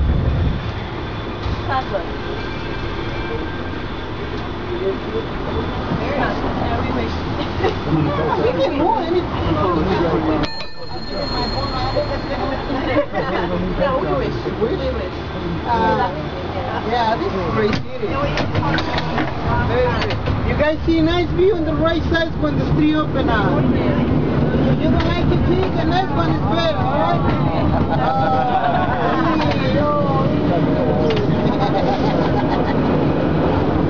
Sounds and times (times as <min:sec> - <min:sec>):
Vehicle: 0:00.0 - 0:33.8.